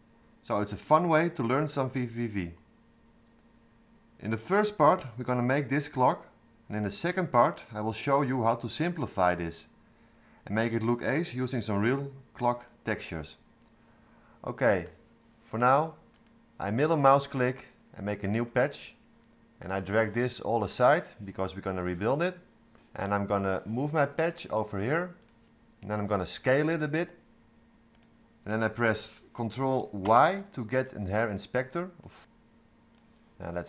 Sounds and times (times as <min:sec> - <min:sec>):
Speech: 0:00.4 - 0:02.6, 0:04.2 - 0:09.7, 0:10.4 - 0:13.4, 0:14.4 - 0:16.0, 0:16.6 - 0:19.0, 0:19.6 - 0:25.2, 0:25.8 - 0:27.2, 0:28.4 - 0:32.3, 0:33.4 - 0:33.6.